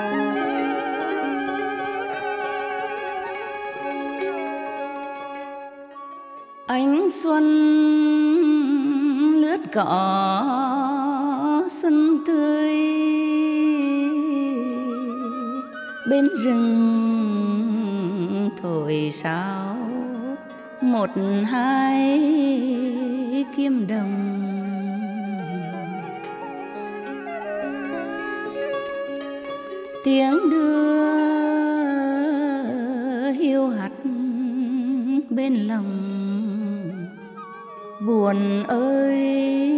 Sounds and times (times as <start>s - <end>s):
Music: 0.0s - 39.7s.